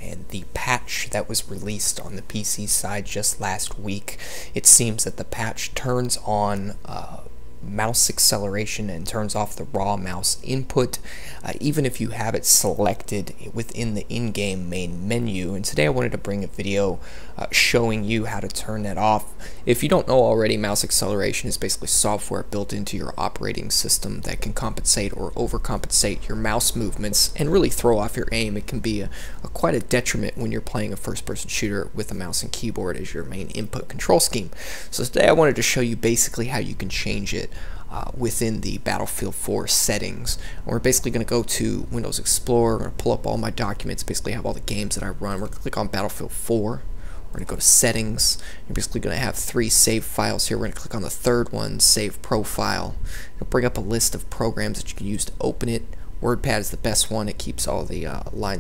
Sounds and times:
Speech: 0.0s - 58.6s.

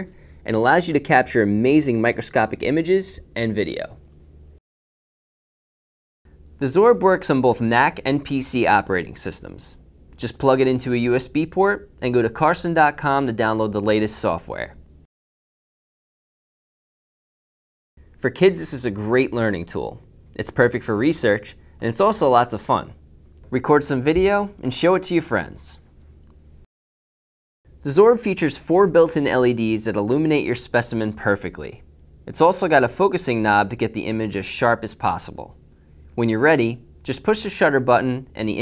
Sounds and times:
Speech: 0.0s - 4.0s, 6.6s - 14.8s, 18.2s - 25.9s, 27.8s - 35.6s, 36.2s - 38.6s.

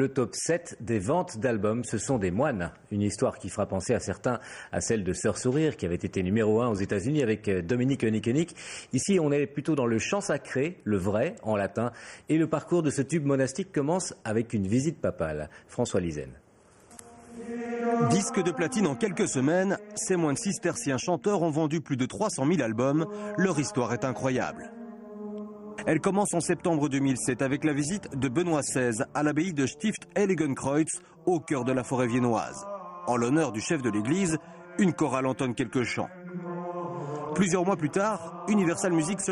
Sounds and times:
Speech: 0.0s - 16.4s, 17.4s - 24.7s, 25.8s - 36.1s, 37.4s - 39.3s
Mantra: 16.9s - 39.3s.

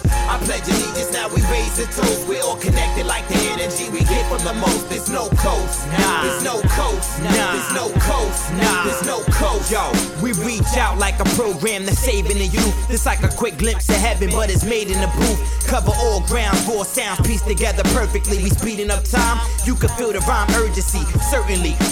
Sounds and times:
Music: 0.0s - 21.9s.

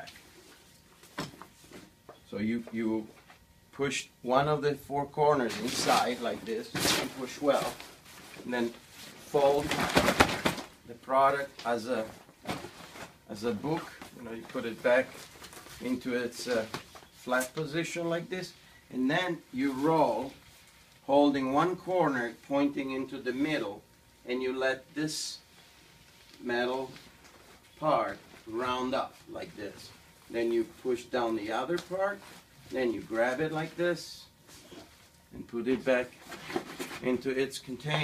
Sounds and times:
Speech: 2.3s - 3.2s, 3.8s - 7.8s, 8.4s - 10.1s, 10.9s - 12.2s, 13.3s - 15.2s, 15.8s - 20.4s, 21.1s - 25.4s, 26.4s - 27.0s, 27.8s - 34.3s, 35.3s - 36.2s, 37.0s - 38.0s.

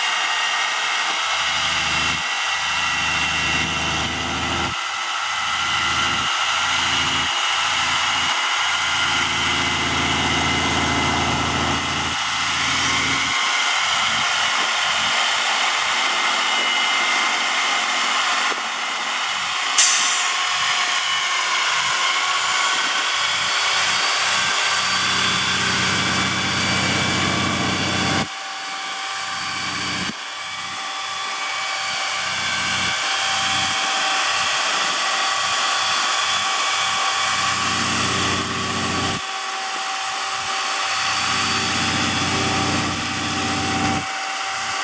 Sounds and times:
Vehicle: 0.0s - 44.8s.

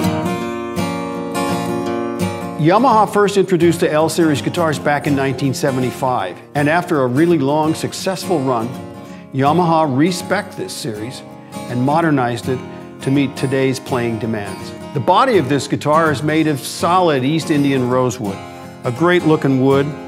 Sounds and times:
Acoustic guitar: 0.0s - 20.0s
Speech: 2.6s - 8.8s, 9.4s - 20.0s.

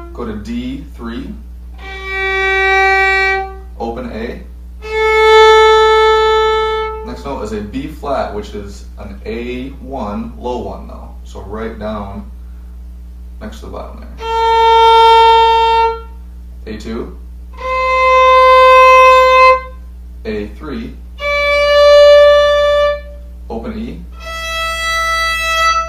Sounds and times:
Speech: 0.1s - 1.4s, 3.8s - 4.5s, 7.0s - 12.4s, 13.4s - 14.2s, 16.6s - 17.2s, 20.2s - 21.0s, 23.5s - 24.1s
Violin, fiddle: 1.8s - 3.7s, 4.8s - 7.1s, 14.2s - 16.1s, 17.6s - 19.8s, 21.2s - 23.3s, 24.2s - 25.8s.

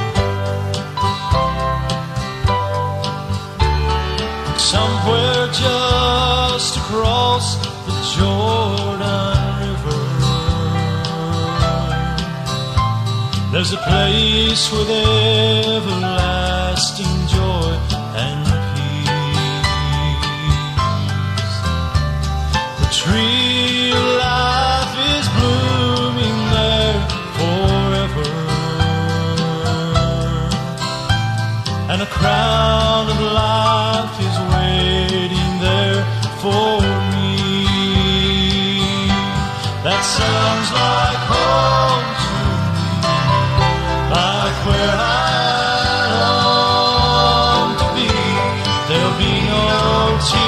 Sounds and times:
Music: 0.0s - 50.4s.

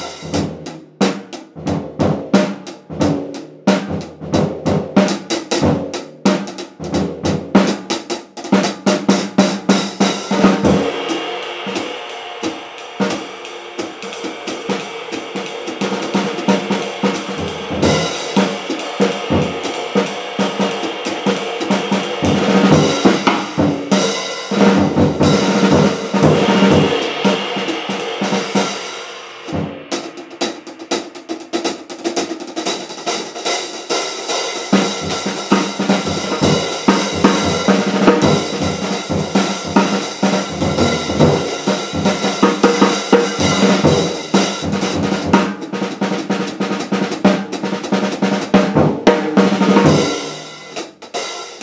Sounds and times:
Bass drum: 0.0s - 7.8s, 8.7s - 32.0s, 34.8s - 45.7s
Drum kit: 0.0s - 51.6s.

